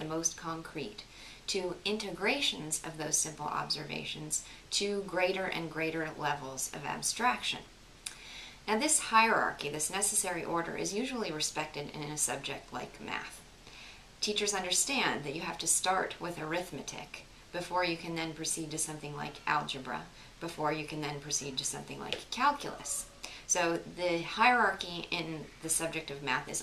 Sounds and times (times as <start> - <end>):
Speech: 0.0 - 7.7, 8.7 - 13.4, 14.2 - 26.6.